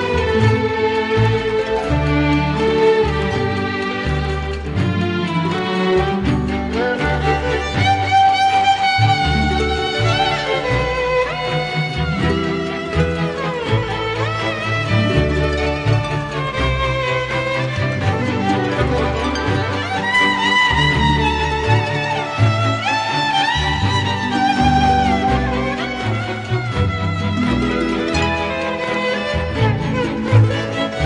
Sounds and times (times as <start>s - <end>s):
Music: 0.0s - 31.0s.